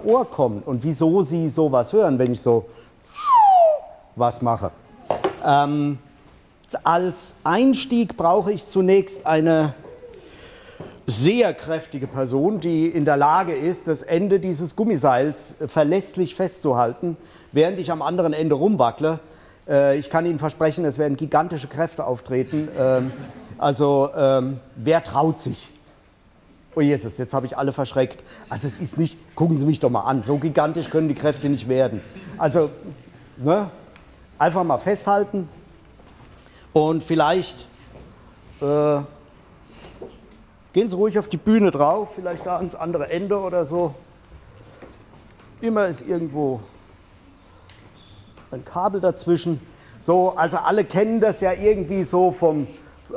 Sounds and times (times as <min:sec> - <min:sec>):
Speech: 0:00.0 - 0:02.7, 0:04.2 - 0:04.8, 0:05.4 - 0:06.0, 0:06.7 - 0:09.8, 0:11.1 - 0:25.8, 0:26.7 - 0:33.8, 0:34.4 - 0:35.6, 0:36.8 - 0:37.7, 0:38.6 - 0:39.2, 0:40.7 - 0:44.1, 0:45.6 - 0:46.7, 0:48.5 - 0:53.1.